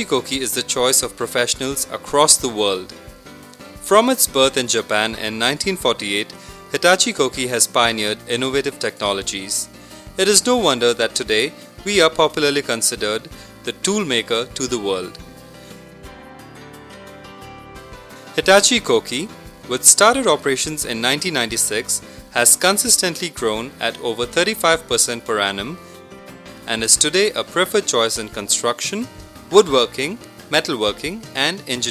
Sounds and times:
Speech: 0.0 - 2.9, 3.9 - 15.2, 18.4 - 25.8, 26.7 - 31.9
Music: 0.0 - 31.9.

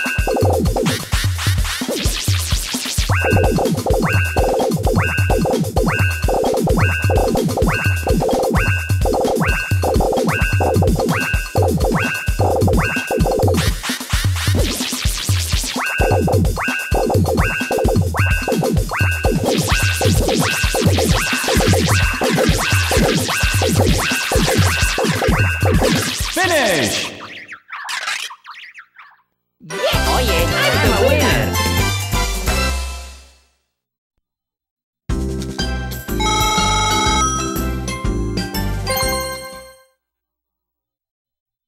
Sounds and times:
Music: 0.0 - 26.4, 29.7 - 33.7, 35.1 - 40.0
Speech: 26.4 - 27.2, 29.6 - 31.6.

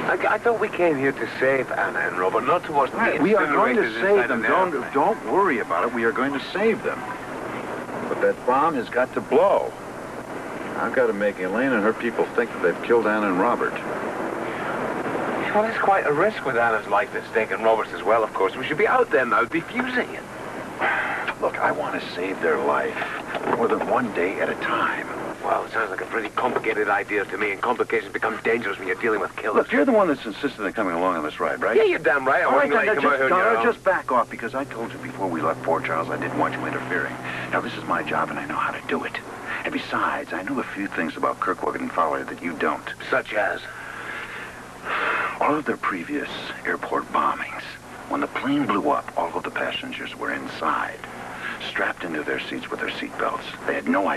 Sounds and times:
Speech: 0.0 - 7.1, 8.1 - 9.8, 10.8 - 13.8, 15.4 - 20.2, 21.3 - 43.7, 45.3 - 54.1.

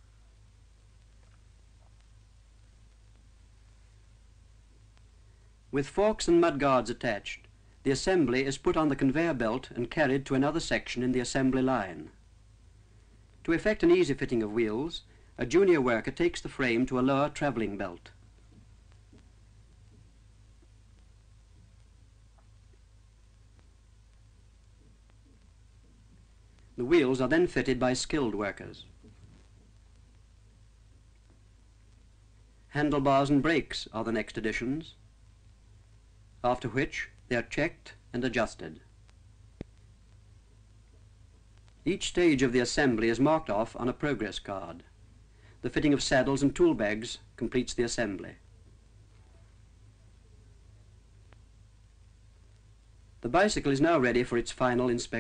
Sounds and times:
Speech: 5.7 - 12.2, 13.4 - 18.2, 26.8 - 29.0, 32.7 - 35.0, 36.4 - 38.9, 41.8 - 45.0, 45.6 - 48.5, 53.2 - 55.2.

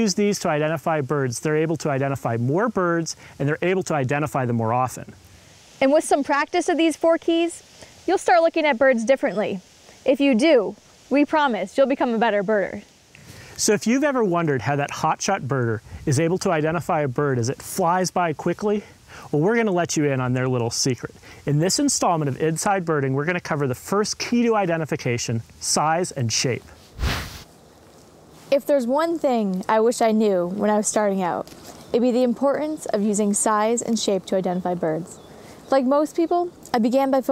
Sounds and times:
Speech: 0.0 - 5.2, 5.8 - 12.8, 13.6 - 26.7, 28.6 - 31.4, 32.0 - 37.3.

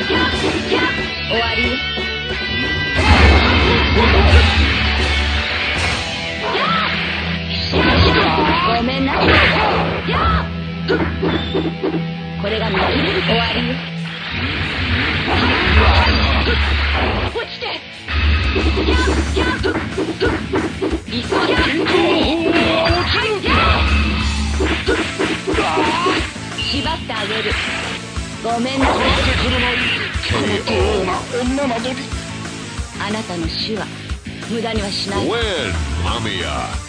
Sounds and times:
Music: 0.0 - 36.8
Speech: 0.1 - 1.8, 12.4 - 13.8, 21.1 - 23.8, 28.4 - 32.1, 33.0 - 33.9, 34.5 - 36.8.

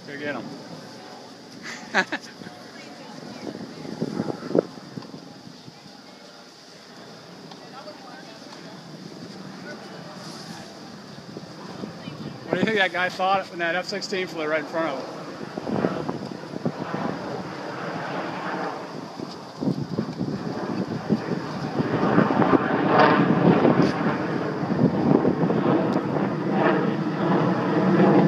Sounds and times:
Aircraft: 0.0 - 28.2.

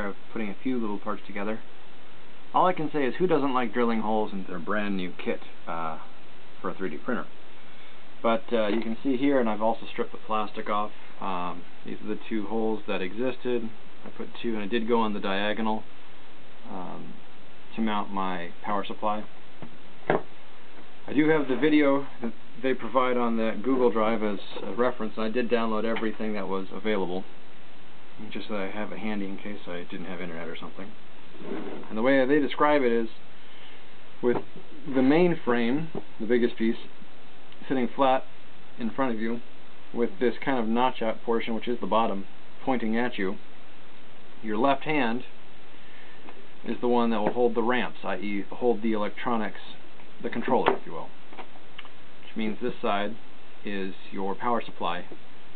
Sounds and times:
Speech: 0.0 - 1.7, 2.5 - 7.4, 8.2 - 15.9, 16.6 - 19.4, 21.1 - 27.3, 28.2 - 33.2, 34.2 - 37.0, 37.6 - 43.4, 44.4 - 45.4, 46.6 - 51.2, 52.2 - 55.2.

